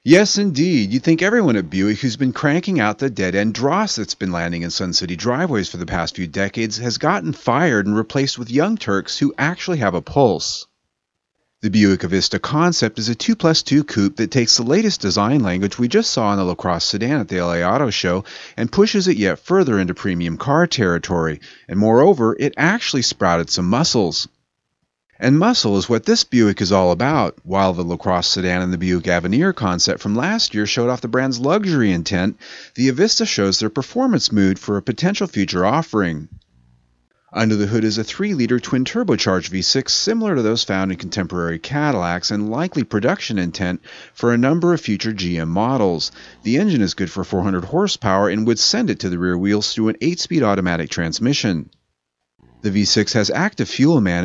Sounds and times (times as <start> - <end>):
Speech: 0.0 - 10.7, 11.6 - 24.4, 25.2 - 36.4, 37.4 - 51.8, 52.6 - 54.2.